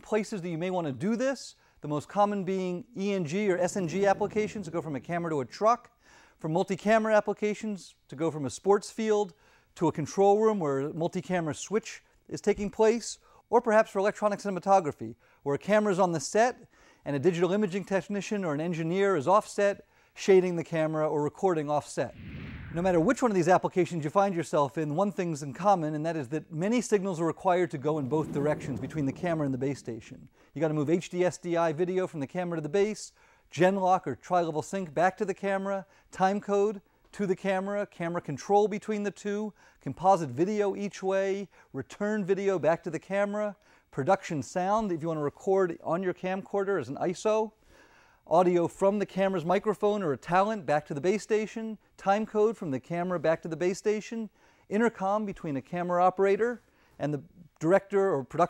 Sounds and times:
Speech: 0.0 - 47.6, 48.3 - 58.4.

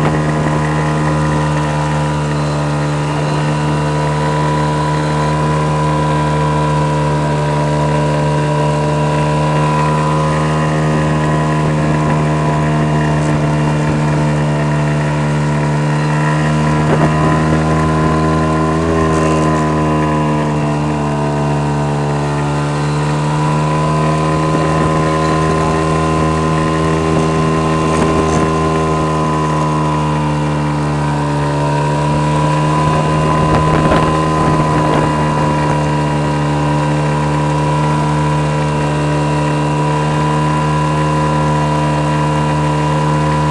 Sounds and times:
Wind noise (microphone): 0.0 - 0.8, 16.2 - 19.3, 24.1 - 29.2, 32.1 - 36.6
Motorboat, speedboat: 0.0 - 43.5.

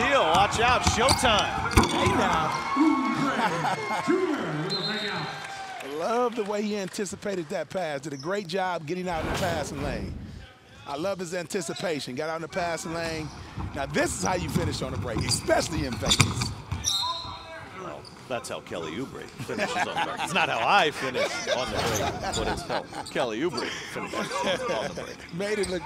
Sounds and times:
Basketball bounce: 15.2 - 16.9.

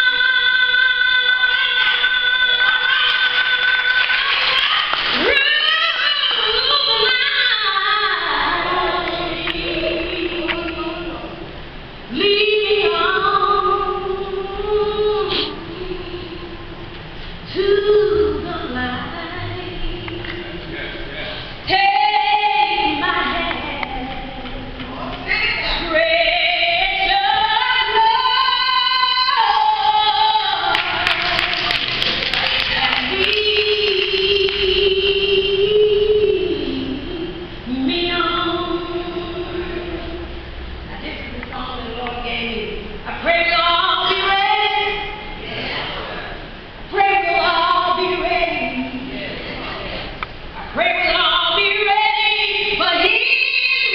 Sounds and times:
Female singing: 0.0 - 11.4, 12.1 - 16.6, 17.5 - 20.4, 21.7 - 40.3, 40.9 - 45.2, 46.9 - 49.2, 50.7 - 53.9.

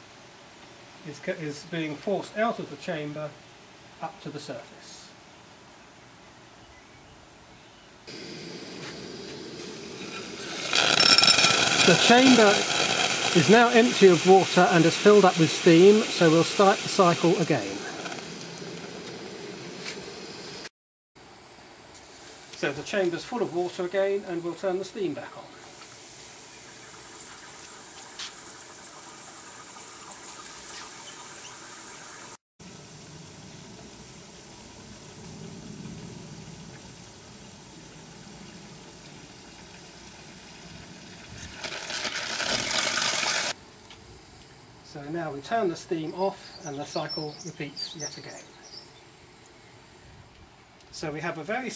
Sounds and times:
Hiss: 8.1 - 20.7, 22.0 - 22.8, 23.8 - 44.7.

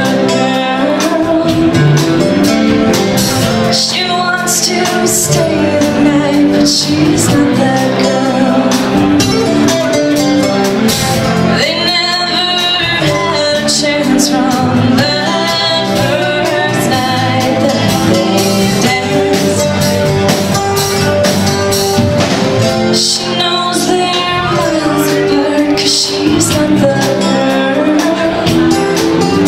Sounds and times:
Music: 0.0 - 29.4.

